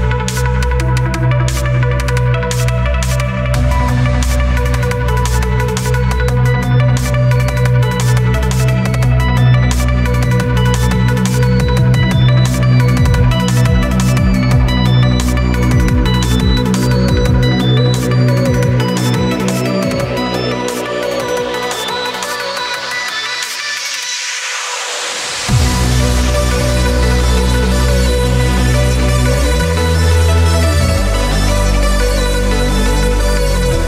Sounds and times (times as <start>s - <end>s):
Drum and bass: 0.0s - 33.8s.